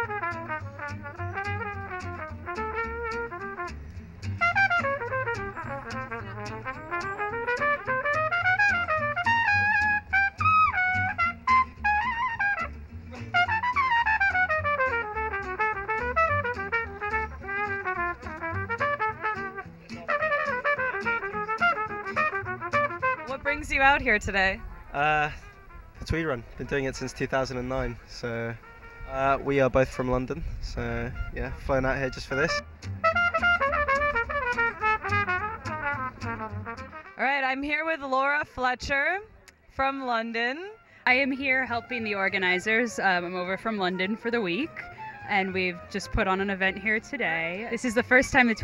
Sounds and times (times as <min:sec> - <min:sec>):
Music: 0:00.0 - 0:48.6.